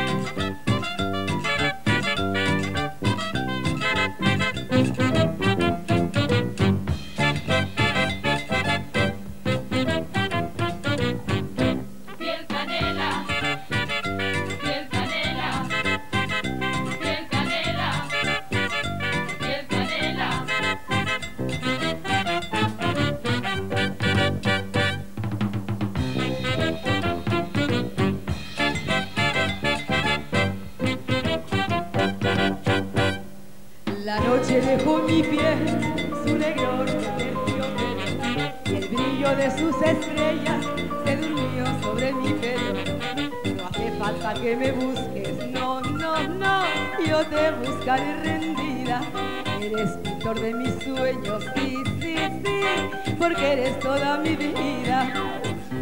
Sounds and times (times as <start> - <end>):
Music: 0.0 - 55.8.